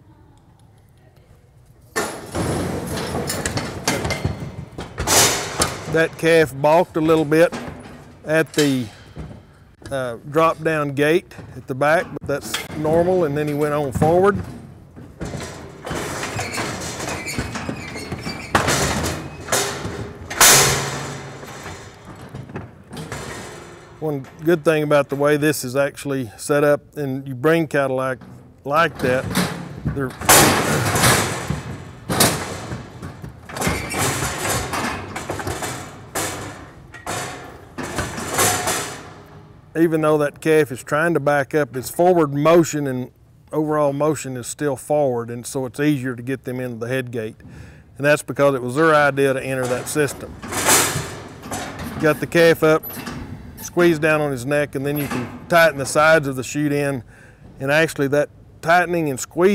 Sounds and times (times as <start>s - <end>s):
Speech: 5.9s - 7.6s, 8.3s - 8.9s, 9.8s - 14.4s, 24.0s - 29.3s, 29.9s - 31.0s, 39.8s - 47.4s, 48.0s - 50.3s, 52.0s - 53.0s, 53.6s - 57.0s, 57.6s - 59.5s.